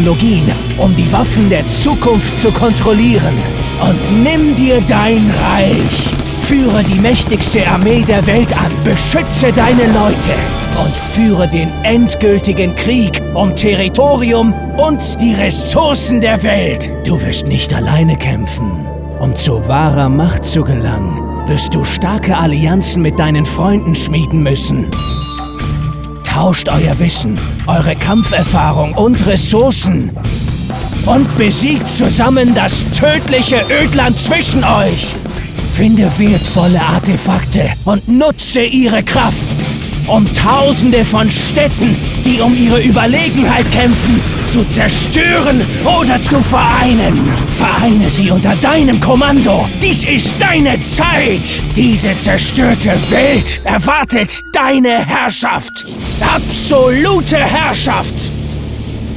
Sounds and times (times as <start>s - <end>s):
Speech: 0.0s - 25.0s, 26.2s - 30.2s, 31.0s - 58.3s
Music: 0.0s - 59.1s.